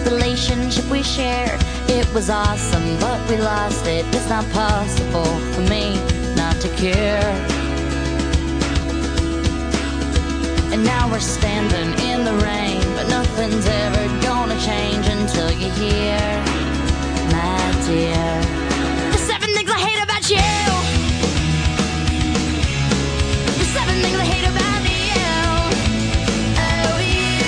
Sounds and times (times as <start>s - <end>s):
Exciting music: 18.4s - 27.4s.